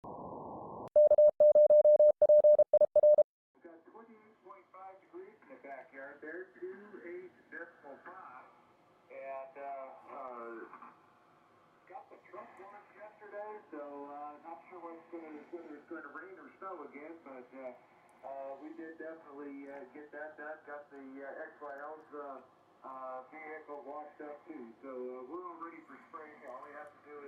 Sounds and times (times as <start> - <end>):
Speech: 3.6 - 11.0, 11.8 - 27.2
Radio: 9.3 - 11.0, 11.9 - 27.2.